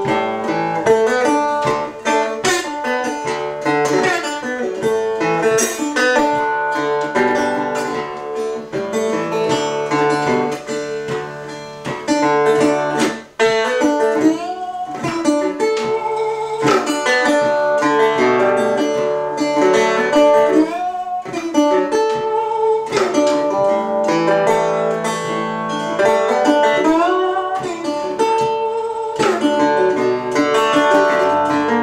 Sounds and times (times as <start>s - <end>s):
Banjo: 0.0s - 31.8s.